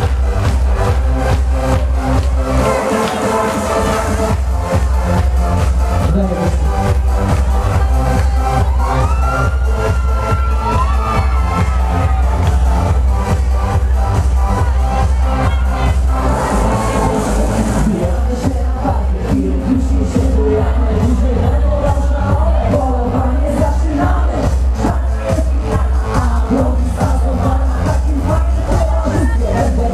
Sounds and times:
Music: 0.0s - 29.9s.

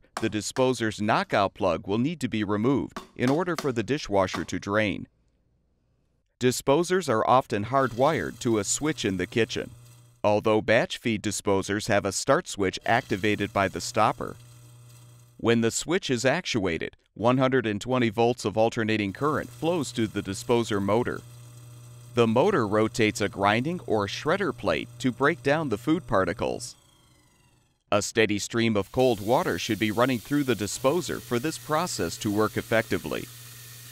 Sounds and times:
Speech: 0.2s - 5.1s, 6.4s - 14.4s, 15.4s - 21.2s, 22.2s - 26.8s, 27.9s - 33.3s.

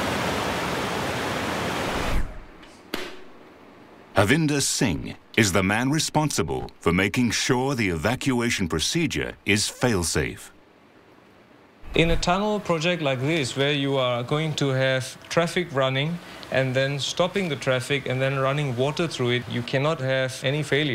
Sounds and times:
Speech: 4.2s - 10.5s, 11.9s - 20.9s.

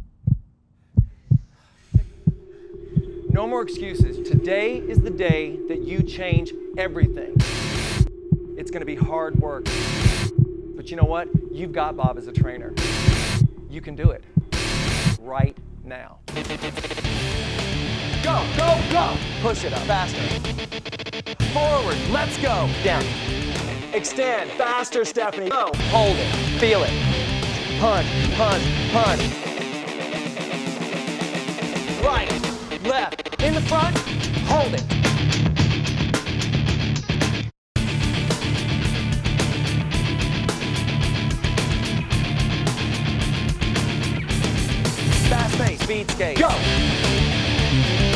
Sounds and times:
Speech: 3.4s - 7.4s, 8.6s - 9.7s, 10.8s - 12.8s, 13.7s - 14.2s, 15.2s - 16.2s, 18.2s - 20.4s, 21.4s - 23.1s, 23.9s - 29.3s, 32.0s - 34.9s, 45.2s - 46.7s
Music: 3.5s - 10.5s, 11.3s - 13.7s, 14.5s - 48.1s.

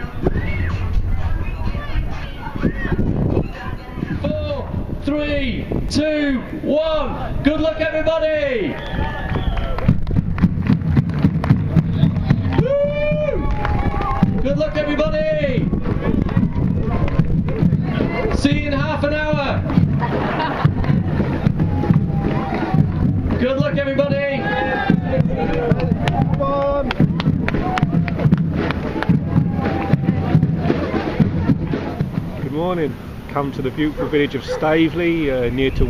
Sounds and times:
Music: 0.0s - 4.2s, 9.7s - 32.9s
Run: 0.0s - 5.0s, 7.4s - 32.7s
Outside, urban or manmade: 0.0s - 35.8s
Speech: 30.1s - 35.8s.

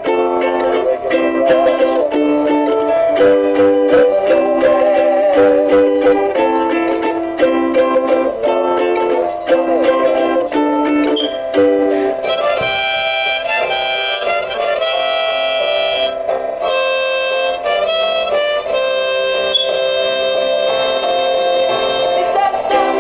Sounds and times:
Harmonica: 0.0s - 22.7s
Mandolin: 0.0s - 23.0s.

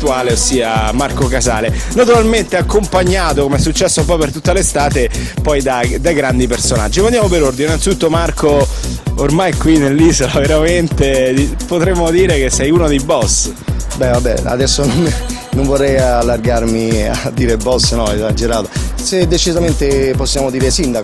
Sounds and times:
Music: 0.0s - 21.0s
Speech: 0.0s - 21.0s.

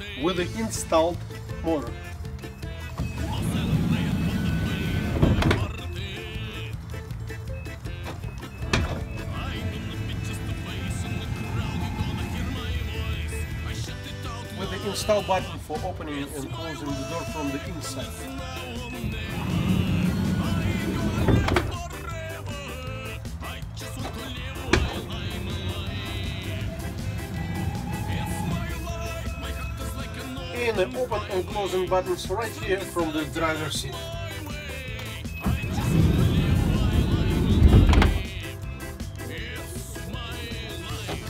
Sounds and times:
Music: 0.0s - 41.3s
Speech: 0.2s - 2.0s, 14.6s - 18.2s, 30.6s - 34.0s
Vehicle: 1.2s - 14.2s, 18.4s - 30.5s
Sliding door: 3.0s - 5.9s, 8.0s - 13.2s, 18.8s - 21.9s, 23.9s - 30.0s, 35.4s - 38.4s.

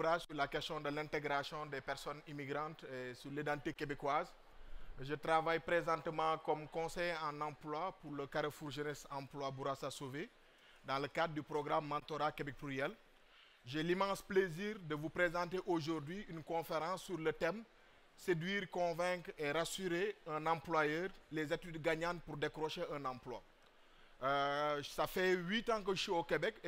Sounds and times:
Speech: 0.0s - 4.4s, 5.0s - 10.3s, 10.9s - 13.0s, 13.7s - 23.5s, 24.2s - 26.6s.

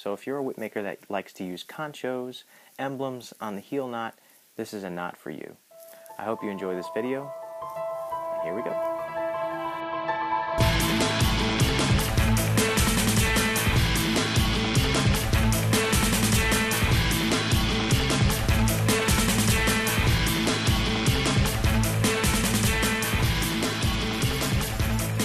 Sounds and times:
Music: 5.8s - 25.2s.

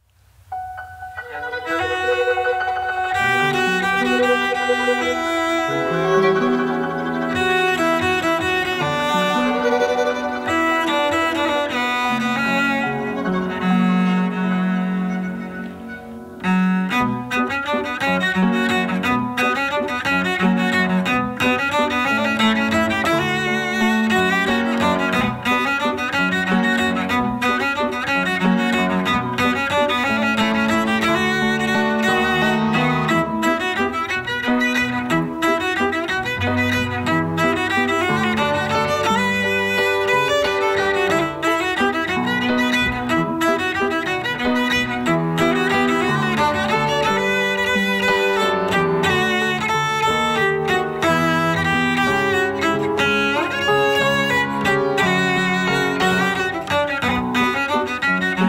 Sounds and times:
Bowed string instrument: 0.5s - 58.4s.

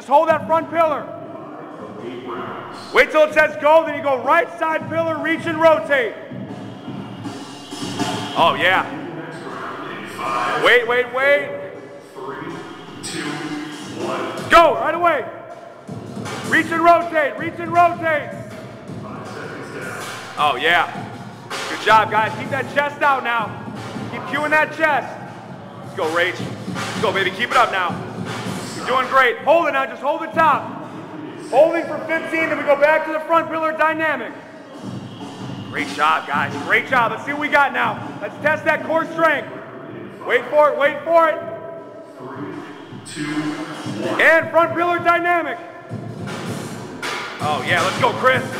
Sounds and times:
Speech: 0.0s - 6.2s, 8.3s - 15.3s, 16.4s - 18.4s, 19.0s - 21.0s, 21.6s - 25.2s, 25.8s - 28.0s, 28.7s - 34.9s, 35.7s - 45.6s, 47.4s - 48.5s
Music: 0.0s - 48.5s.

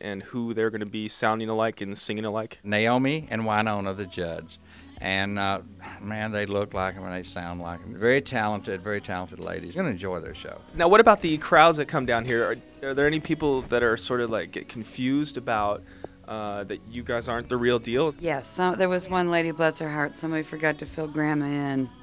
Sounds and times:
Speech: 0.0s - 21.9s
Music: 0.0s - 22.0s.

